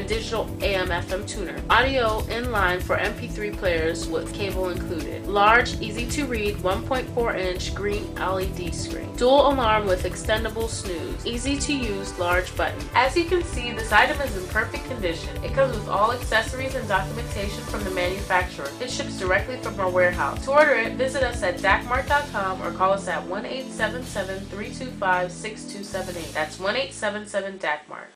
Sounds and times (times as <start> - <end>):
Music: 0.0 - 28.1
Speech: 0.0 - 28.1.